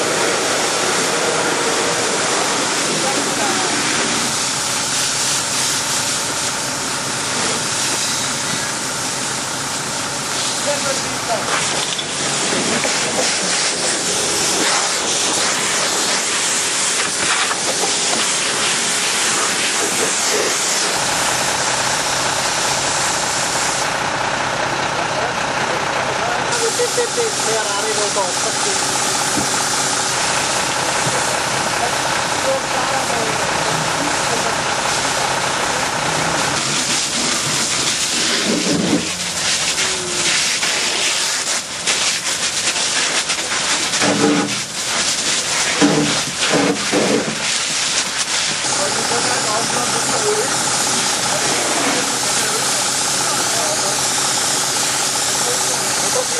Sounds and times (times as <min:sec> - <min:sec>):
Idling: 0:00.0 - 0:56.3
Truck: 0:00.0 - 0:56.3
Speech: 0:02.9 - 0:03.8, 0:10.6 - 0:11.5, 0:24.9 - 0:28.9, 0:31.0 - 0:34.7, 0:48.7 - 0:50.6, 0:51.2 - 0:54.1, 0:55.3 - 0:56.3.